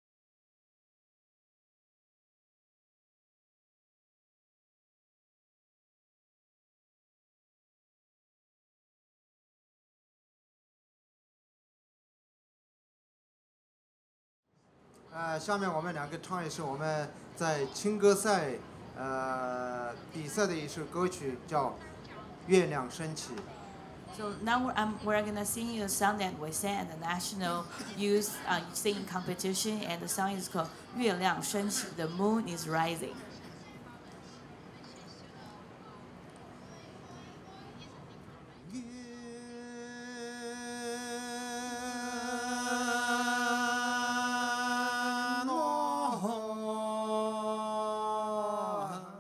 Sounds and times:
Speech: 15.1 - 38.8.

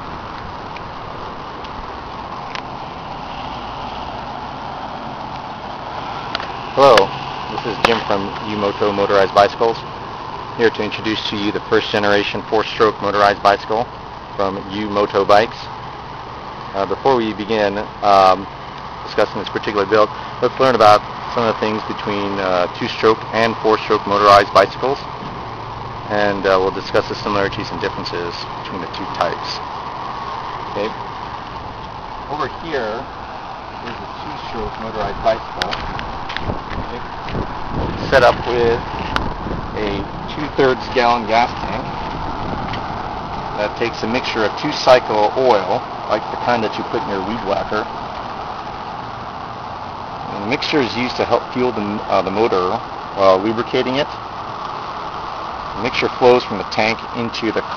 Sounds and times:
Vehicle: 0.0 - 57.7
Speech: 6.8 - 9.8, 10.6 - 15.7, 16.7 - 18.5, 19.1 - 25.1, 26.1 - 29.6, 30.7 - 31.0, 32.3 - 33.1, 33.8 - 35.8, 38.0 - 38.8, 39.8 - 41.9, 43.6 - 47.9, 50.3 - 54.2, 55.8 - 57.7.

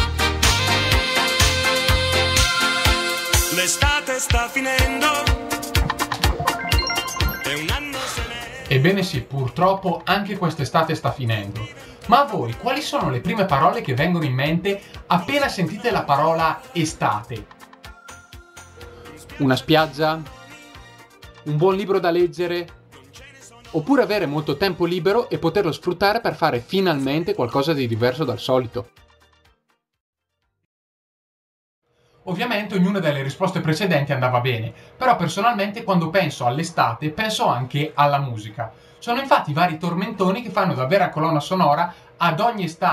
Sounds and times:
Music: 0.0 - 30.7
Speech: 8.7 - 17.5, 19.3 - 20.3, 21.5 - 22.7, 23.4 - 28.9, 32.3 - 42.9.

